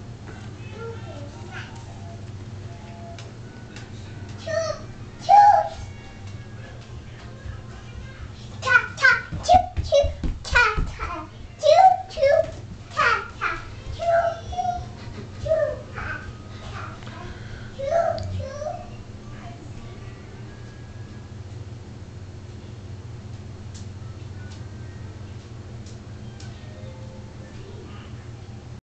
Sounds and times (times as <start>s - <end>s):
Music: 0.0s - 21.8s, 22.5s - 28.8s.